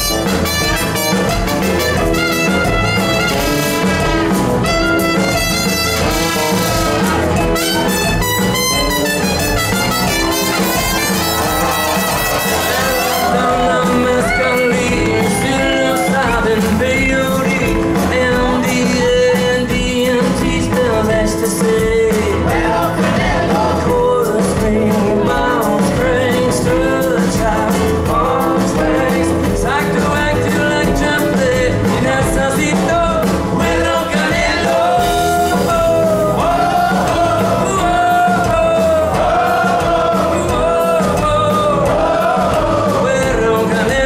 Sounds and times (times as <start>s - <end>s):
Singing: 12.3s - 44.0s.